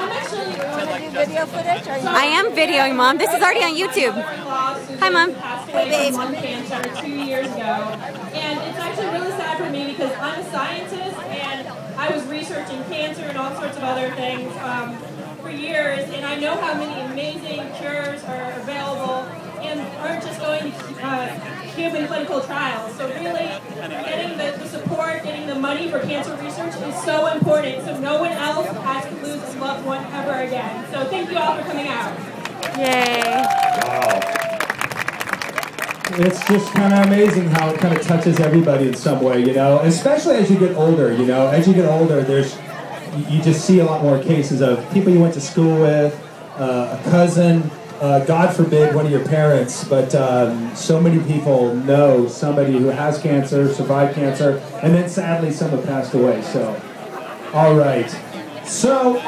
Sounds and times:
Crowd: 0.0 - 59.2.

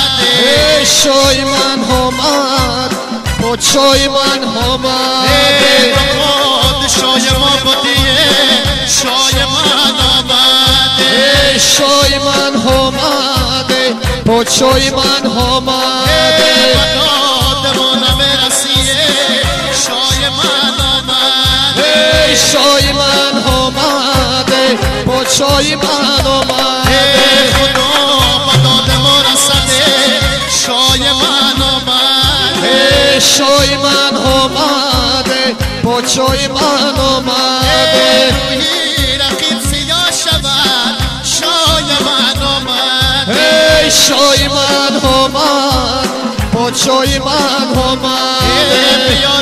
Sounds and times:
Wedding music: 0.0 - 49.4.

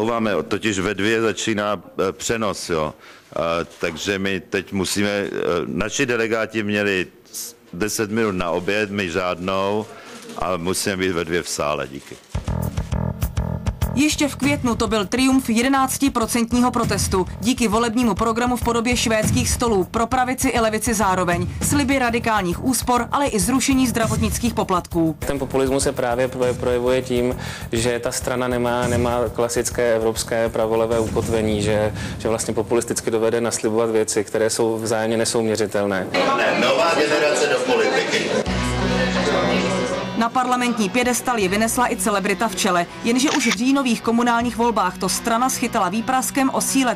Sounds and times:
Speech: 0.0 - 12.2, 14.0 - 38.4
Music: 12.2 - 32.8, 38.1 - 46.9.

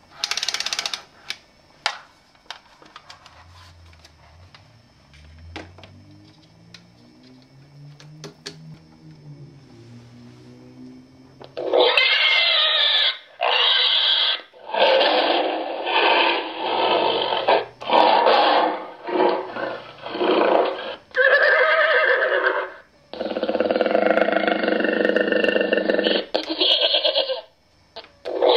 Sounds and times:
Inside, small room: 0.0 - 28.5.

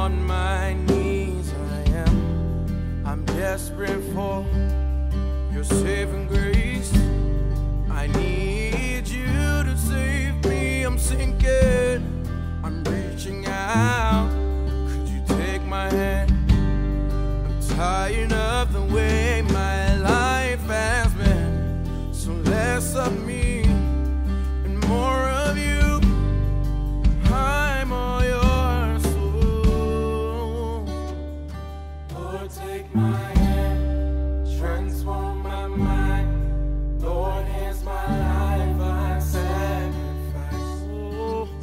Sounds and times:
Music: 0.0 - 41.6.

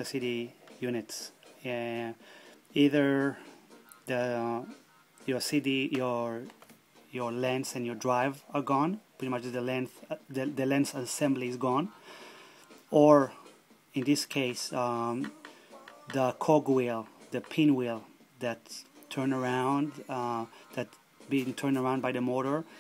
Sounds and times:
Speech: 0.0 - 2.2, 2.8 - 3.4, 4.1 - 6.5, 7.1 - 12.0, 12.9 - 13.4, 14.0 - 15.4, 16.0 - 22.7
Music: 0.0 - 22.8.

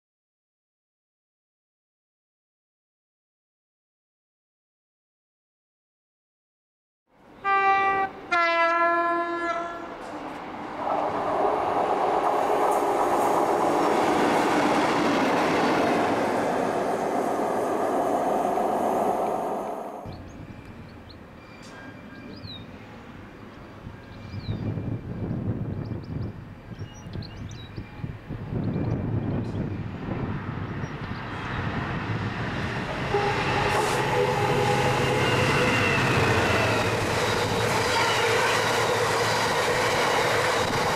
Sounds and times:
Railroad car, train wagon: 7.1 - 40.9
Train horn: 7.4 - 10.0, 33.0 - 36.6, 37.4 - 40.9.

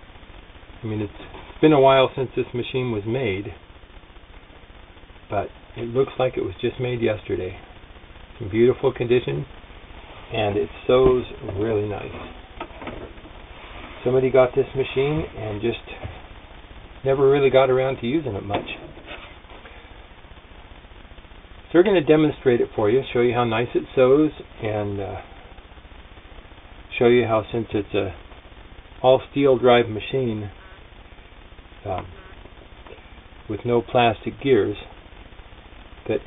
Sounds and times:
Speech: 0.8 - 3.6, 5.3 - 7.6, 8.4 - 9.5, 10.3 - 12.3, 14.0 - 16.2, 17.0 - 18.9, 21.7 - 25.3, 26.9 - 28.2, 29.0 - 30.6, 31.8 - 32.2, 33.5 - 35.0, 36.0 - 36.2.

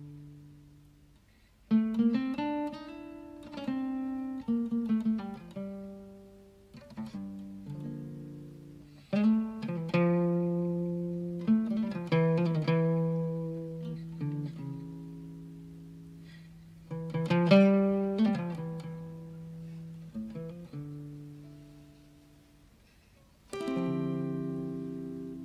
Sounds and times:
Guitar: 0.0 - 25.4.

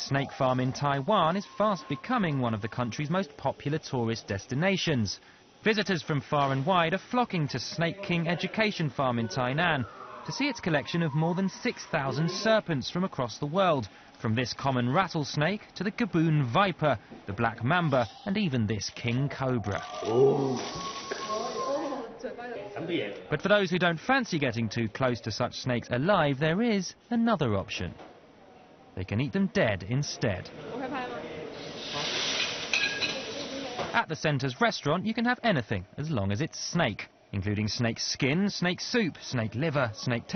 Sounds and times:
Speech: 0.0 - 19.9, 22.9 - 28.0, 29.0 - 31.4, 33.3 - 40.3
Hiss: 20.6 - 21.8, 31.6 - 33.9.

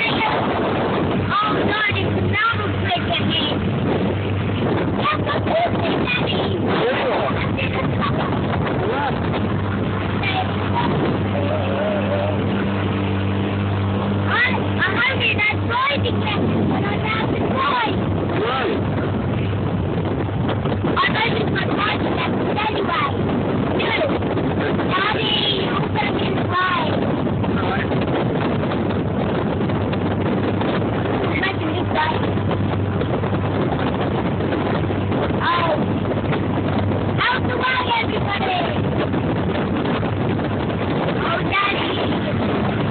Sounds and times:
Sailboat, sailing ship: 0.0 - 42.9
Speech: 21.0 - 23.1, 24.9 - 27.0, 31.3 - 32.2, 35.4 - 35.9, 37.2 - 38.8, 41.2 - 42.4.

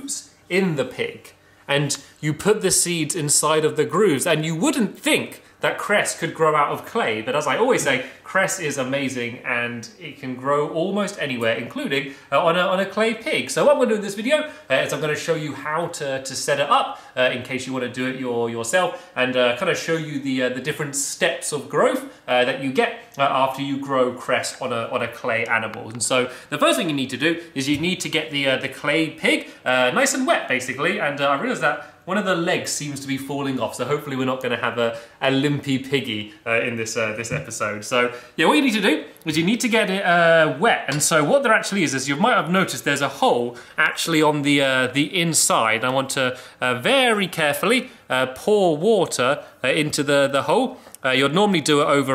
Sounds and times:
Speech: 0.0 - 52.1.

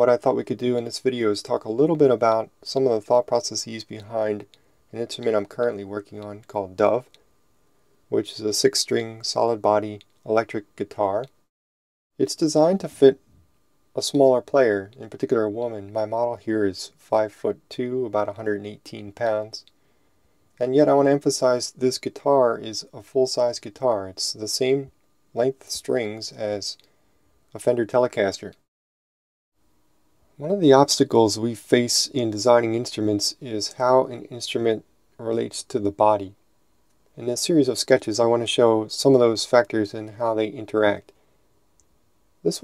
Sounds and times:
Speech: 0.0 - 7.2, 8.1 - 11.4, 12.2 - 13.3, 14.0 - 19.7, 20.6 - 26.8, 27.5 - 28.7, 30.4 - 36.4, 37.2 - 41.2.

